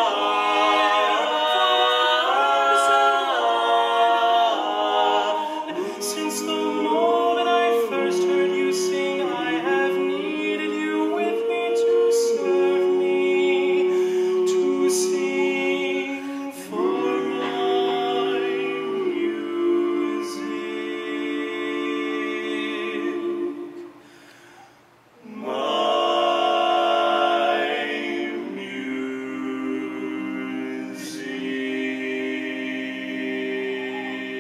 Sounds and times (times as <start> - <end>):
A capella: 0.0 - 34.4.